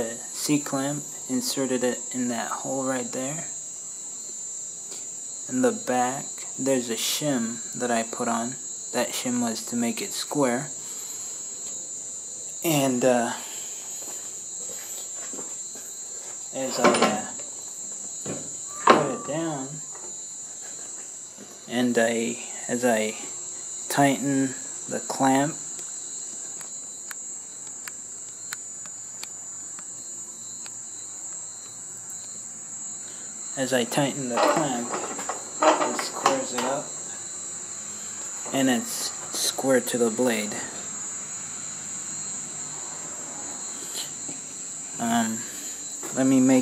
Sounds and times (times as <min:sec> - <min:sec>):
Speech: 0:00.0 - 0:03.6, 0:05.5 - 0:10.8, 0:12.6 - 0:13.4, 0:16.6 - 0:17.4, 0:18.9 - 0:19.8, 0:21.7 - 0:23.3, 0:23.9 - 0:25.6, 0:33.6 - 0:35.0, 0:35.6 - 0:36.9, 0:38.5 - 0:40.8, 0:45.0 - 0:45.5, 0:46.1 - 0:46.6.